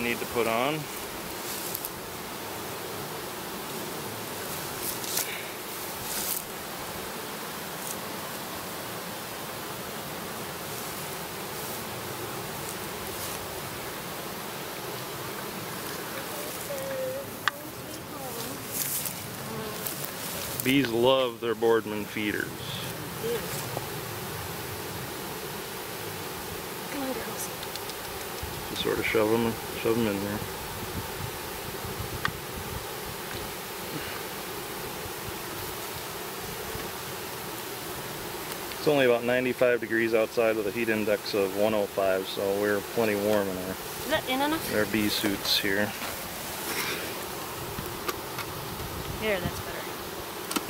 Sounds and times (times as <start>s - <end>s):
Bee, wasp, etc.: 0.0s - 50.6s
Speech: 16.4s - 18.6s, 38.8s - 46.0s, 49.2s - 49.9s.